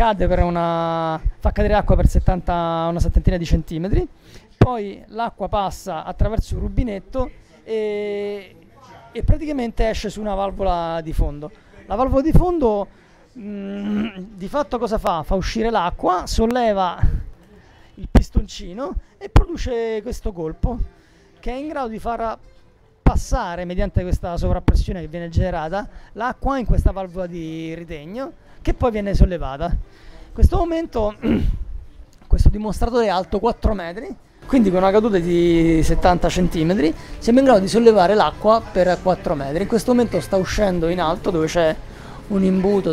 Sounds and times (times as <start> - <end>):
Speech: 0.0 - 22.4, 23.0 - 31.6, 32.2 - 42.9.